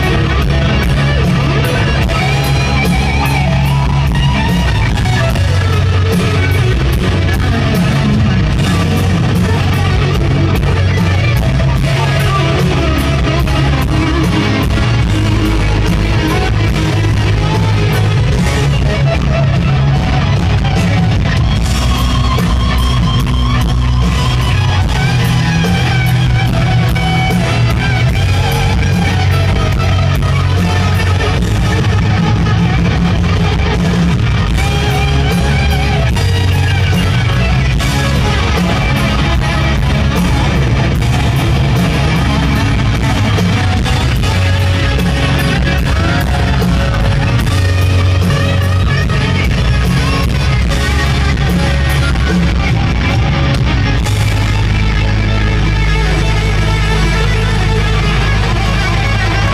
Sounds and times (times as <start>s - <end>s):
Guitar: 0.0s - 59.5s.